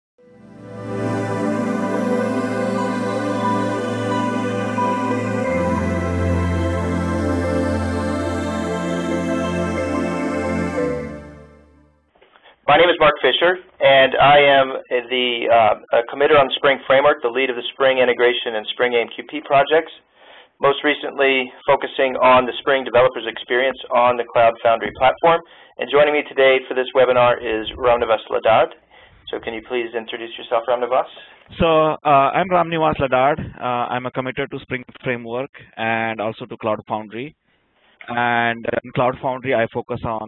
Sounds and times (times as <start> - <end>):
New-age music: 0.2 - 12.1.